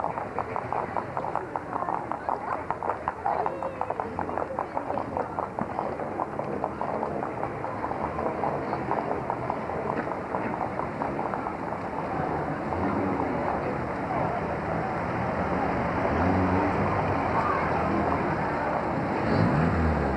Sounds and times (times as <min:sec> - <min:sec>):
Outside, urban or manmade: 0:00.0 - 0:20.1
Car: 0:11.3 - 0:20.1.